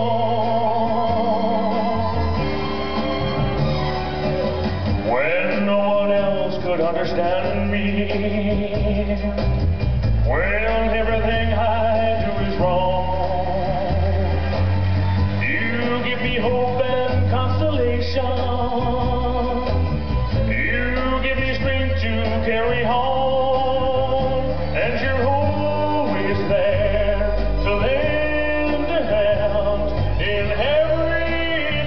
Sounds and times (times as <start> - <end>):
Male singing: 0.0 - 2.2, 5.1 - 9.5, 10.3 - 14.4, 15.4 - 19.8, 20.4 - 31.8
Music: 0.0 - 31.8.